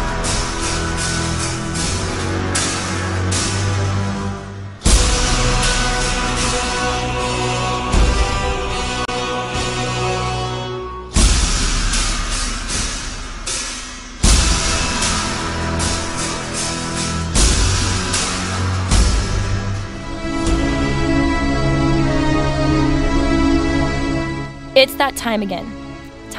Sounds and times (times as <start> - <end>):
Music: 0.0 - 26.3.